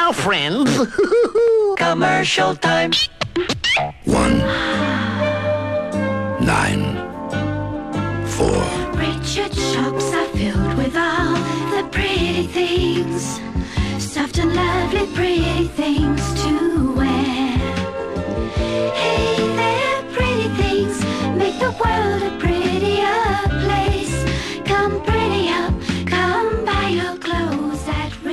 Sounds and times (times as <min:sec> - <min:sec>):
Jingle (music): 0:04.4 - 0:28.3.